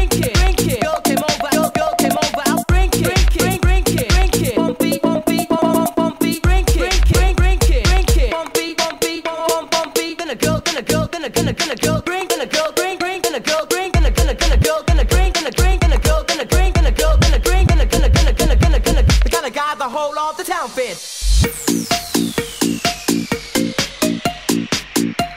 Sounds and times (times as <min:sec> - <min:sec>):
Dance music: 0:00.0 - 0:25.3.